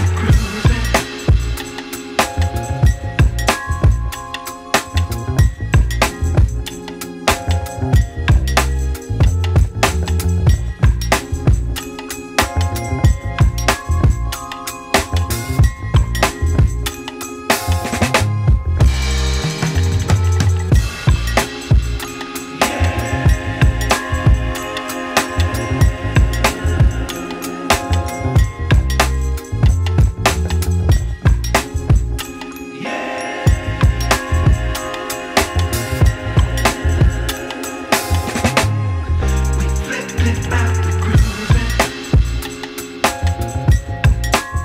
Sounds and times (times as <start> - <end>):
Christmas music: 0.0 - 44.6.